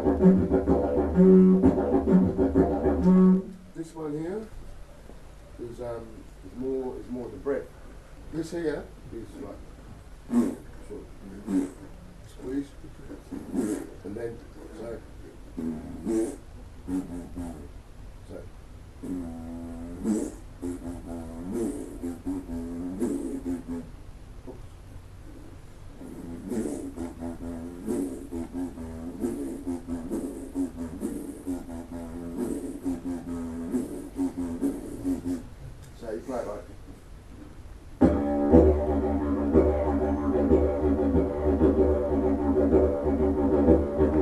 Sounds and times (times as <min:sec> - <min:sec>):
Didgeridoo: 0:00.0 - 0:04.0, 0:10.3 - 0:12.0, 0:13.2 - 0:14.0, 0:14.6 - 0:17.8, 0:19.0 - 0:24.0, 0:25.4 - 0:35.6, 0:38.0 - 0:44.2
Speech: 0:03.8 - 0:04.5, 0:05.6 - 0:07.7, 0:08.3 - 0:09.6, 0:10.4 - 0:16.1, 0:16.9 - 0:18.5, 0:34.4 - 0:36.8.